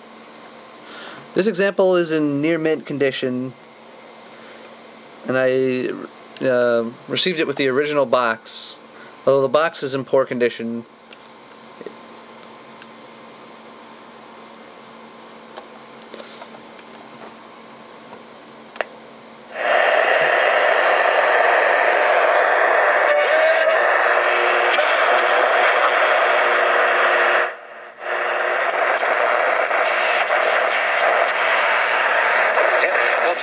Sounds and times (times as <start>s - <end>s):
Speech: 1.4s - 3.6s, 5.2s - 10.9s, 32.6s - 33.4s.